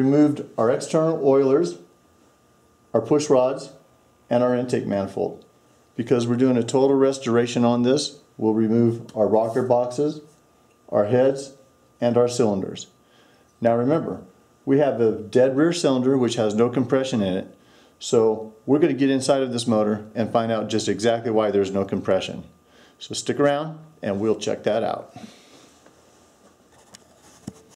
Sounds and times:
Speech: 0.0s - 1.9s, 2.9s - 10.3s, 10.9s - 13.0s, 13.6s - 25.2s.

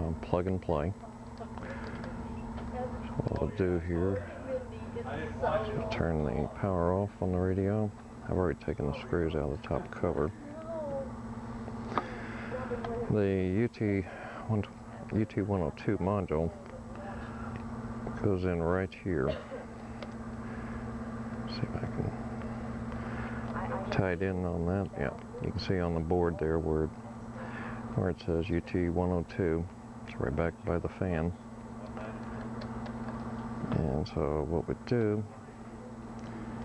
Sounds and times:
Speech: 0.0s - 1.0s, 3.0s - 10.7s, 12.6s - 17.3s, 23.6s - 27.0s, 28.0s - 31.4s, 33.6s - 35.5s.

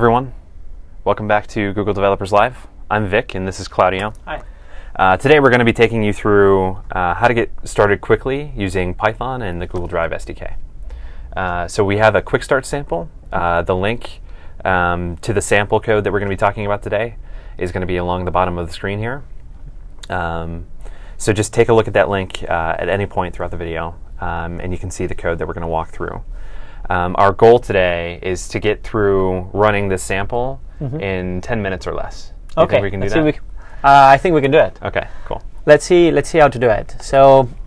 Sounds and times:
Speech: 0.0s - 0.4s, 1.1s - 4.4s, 5.0s - 10.6s, 11.4s - 19.3s, 20.1s - 20.6s, 21.2s - 26.2s, 26.9s - 37.5s.

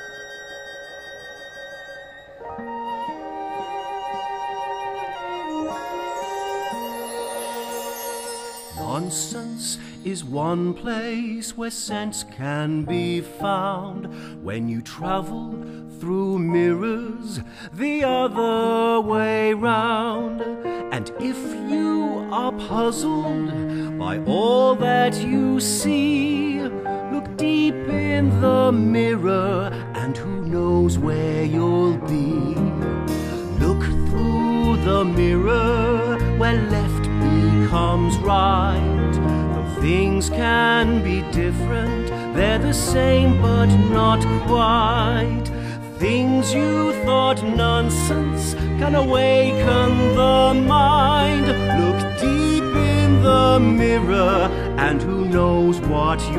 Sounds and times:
Music: 0.0s - 56.3s.

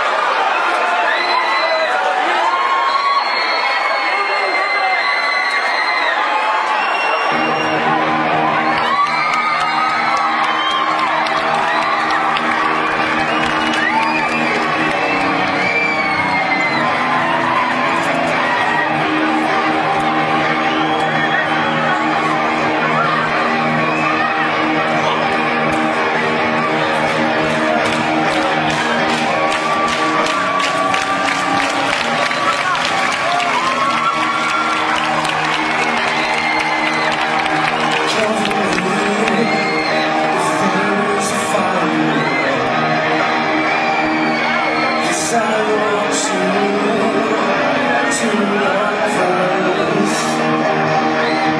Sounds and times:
Cheering: 0.0s - 51.5s
Crowd: 0.0s - 51.5s.

